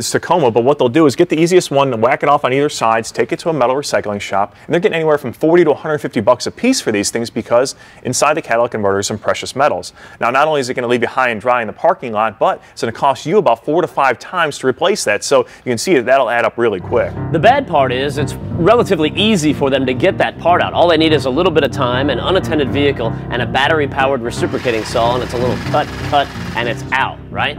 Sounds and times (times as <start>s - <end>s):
Speech: 0.0s - 27.5s
Music: 16.6s - 27.5s.